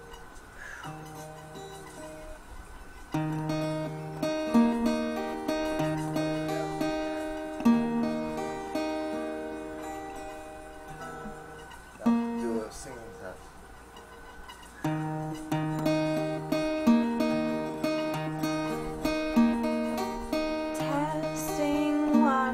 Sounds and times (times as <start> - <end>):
Music: 0.0 - 22.5
Speech: 12.0 - 13.5.